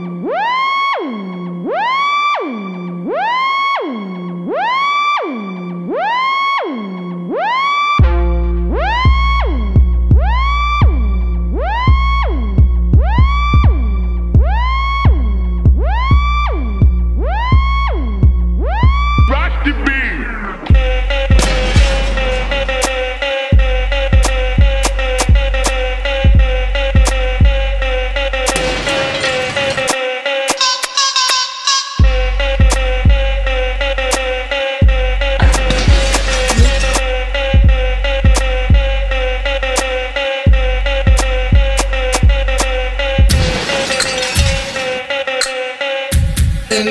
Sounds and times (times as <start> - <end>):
Music: 0.0 - 46.9.